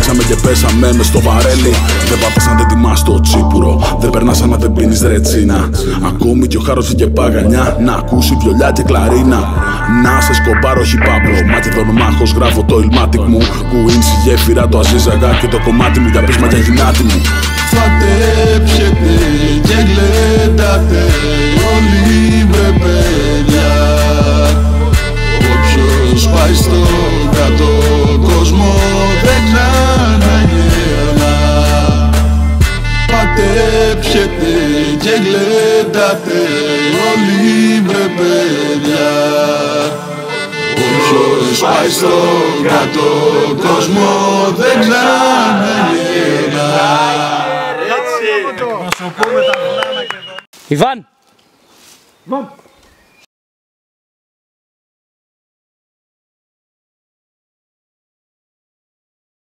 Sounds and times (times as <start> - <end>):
Speech: 47.8 - 51.1, 52.3 - 52.6
Outside, rural or natural: 49.0 - 53.3.